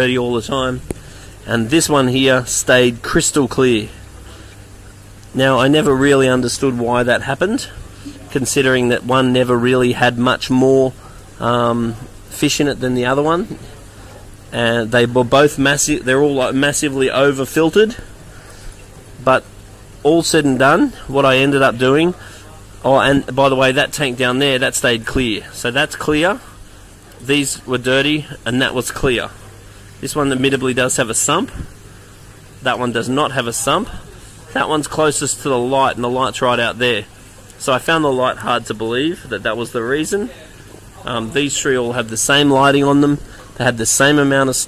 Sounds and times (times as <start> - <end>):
Speech: 0.0 - 0.8, 1.4 - 4.0, 5.3 - 18.1, 19.2 - 26.5, 27.2 - 29.4, 30.0 - 31.7, 32.6 - 44.6
Stream: 0.0 - 44.6.